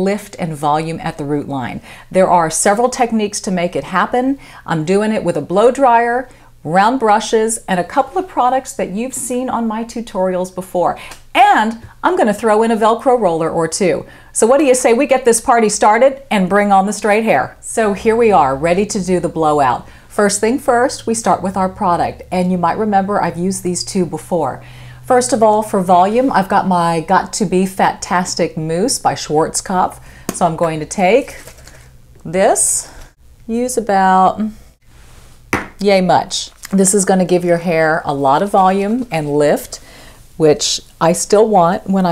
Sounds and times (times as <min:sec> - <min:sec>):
Speech: 0:00.0 - 0:31.4, 0:32.2 - 0:34.6, 0:35.8 - 0:39.8, 0:40.4 - 0:42.1.